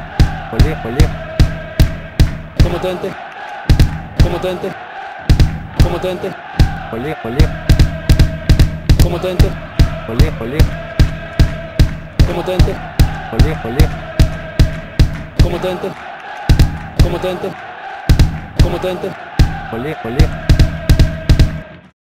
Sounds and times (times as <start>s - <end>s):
Music: 0.0s - 4.5s, 5.2s - 22.0s
Speech: 0.5s - 1.1s, 2.6s - 3.2s, 4.2s - 4.8s, 5.8s - 7.6s, 9.0s - 10.7s, 12.3s - 14.0s, 15.4s - 16.0s, 17.0s - 17.6s, 18.6s - 20.4s
Male singing: 0.6s - 1.2s, 9.0s - 10.8s, 12.2s - 14.0s.